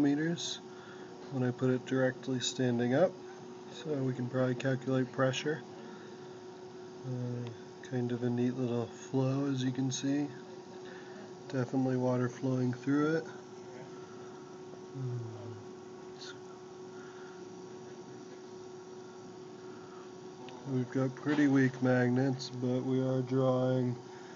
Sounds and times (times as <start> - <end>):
Speech: 0.0 - 0.6, 1.3 - 5.7, 7.0 - 10.5, 11.2 - 13.9, 20.5 - 24.0.